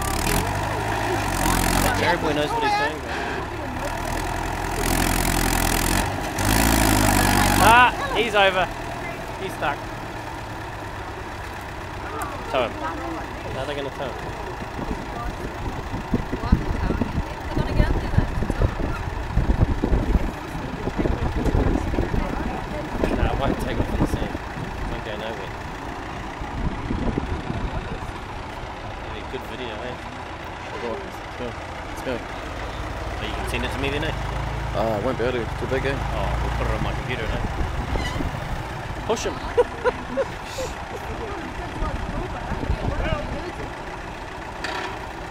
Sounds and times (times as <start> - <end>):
Vehicle: 0.0 - 45.3.